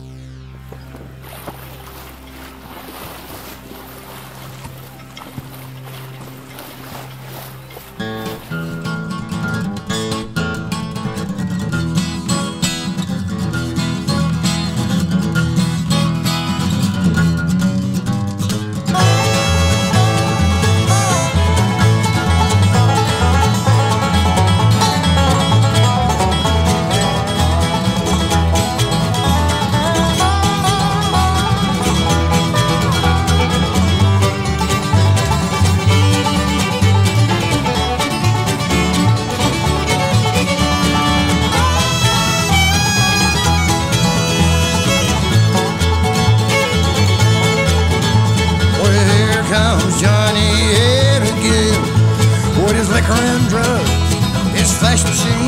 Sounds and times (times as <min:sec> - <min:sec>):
Bluegrass: 0:00.0 - 0:55.4.